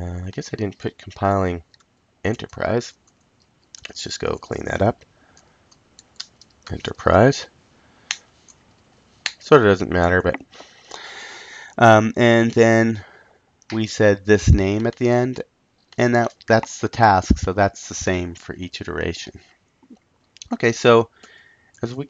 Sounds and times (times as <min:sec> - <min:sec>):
Speech: 0:00.0 - 0:01.6, 0:02.3 - 0:03.0, 0:03.8 - 0:05.0, 0:06.7 - 0:07.5, 0:09.4 - 0:10.5, 0:11.8 - 0:13.1, 0:13.7 - 0:15.4, 0:16.0 - 0:19.4, 0:20.4 - 0:21.1, 0:21.8 - 0:22.0.